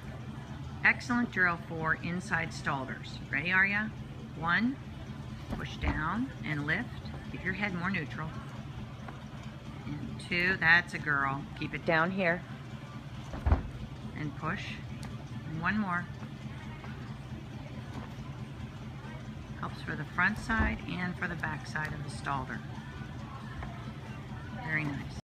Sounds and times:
Speech: 9.8 - 12.5, 19.6 - 22.7, 24.5 - 25.2
Music: 21.0 - 25.2.

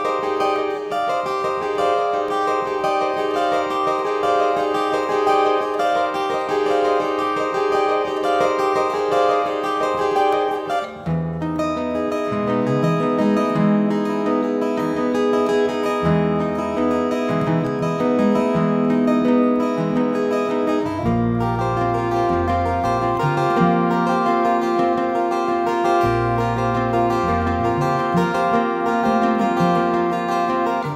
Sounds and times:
Music: 0.0 - 30.9.

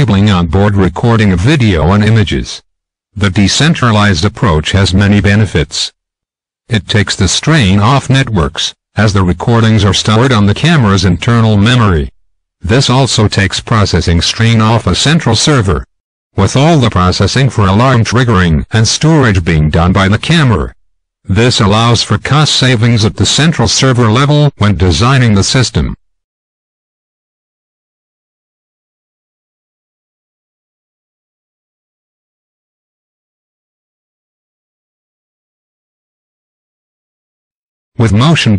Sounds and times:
Speech: 0.0 - 2.6, 3.2 - 6.0, 6.7 - 26.0, 38.0 - 38.5.

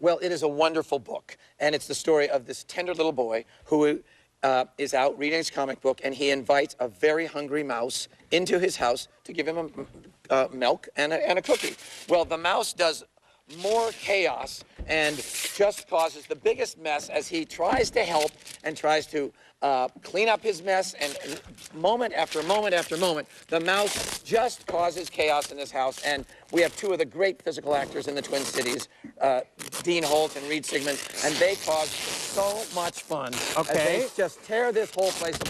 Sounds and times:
Speech: 0.0 - 35.5.

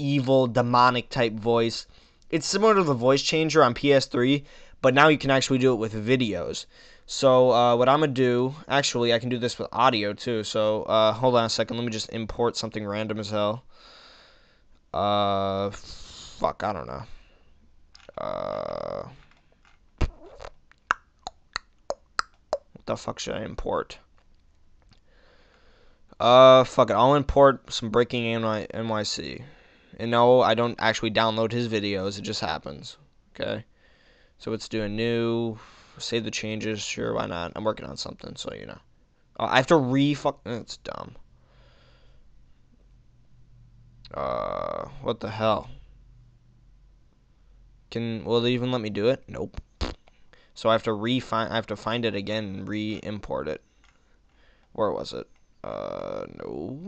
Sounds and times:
Speech: 0.0 - 13.7, 15.0 - 17.2, 18.0 - 19.2, 22.8 - 24.1, 26.2 - 33.7, 34.4 - 41.2, 44.1 - 45.8, 47.9 - 49.6, 50.6 - 53.6, 54.8 - 56.8.

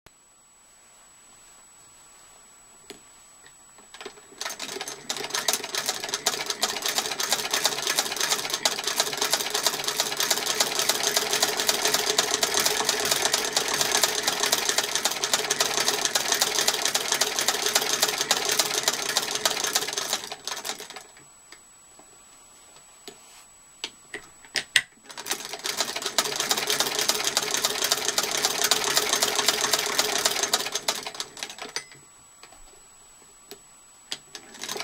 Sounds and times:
Sewing machine: 3.9 - 21.2, 25.0 - 31.9, 34.1 - 34.8.

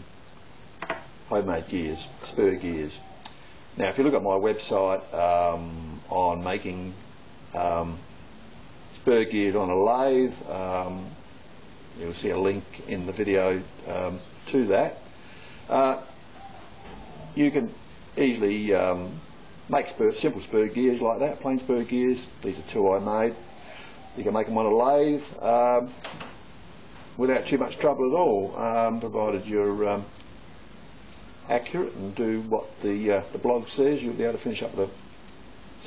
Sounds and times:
Speech: 1.3 - 3.1, 3.8 - 7.0, 7.6 - 8.1, 9.0 - 11.2, 12.0 - 15.1, 15.7 - 16.1, 17.4 - 23.4, 24.2 - 26.0, 27.2 - 30.2, 31.4 - 35.0.

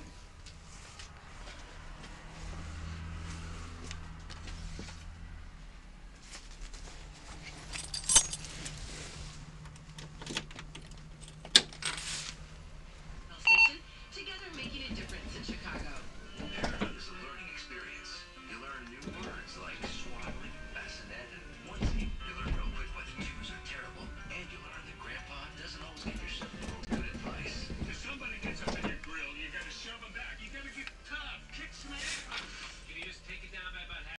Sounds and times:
Speech: 13.3 - 34.1.

